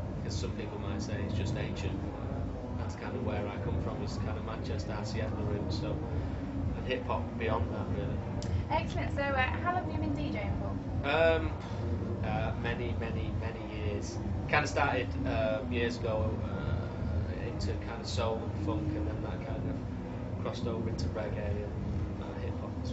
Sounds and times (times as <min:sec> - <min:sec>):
Speech: 0:00.3 - 0:06.1, 0:06.8 - 0:11.6, 0:12.2 - 0:19.8, 0:20.4 - 0:22.9.